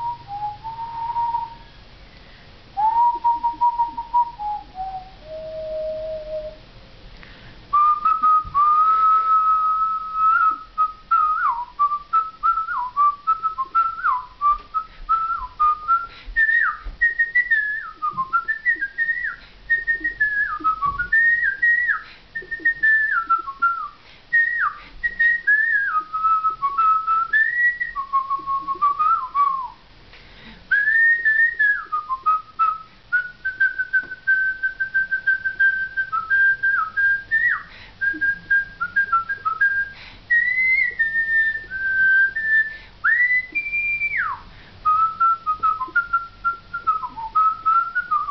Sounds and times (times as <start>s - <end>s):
Whistling: 0.0s - 1.7s, 2.8s - 6.6s, 7.7s - 29.8s, 30.7s - 48.3s.